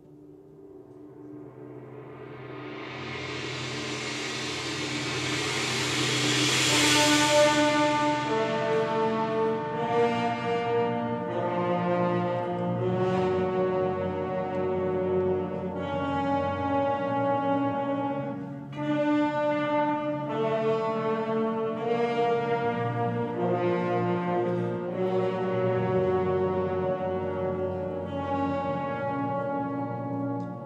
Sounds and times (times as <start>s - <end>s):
Music: 0.0s - 30.6s.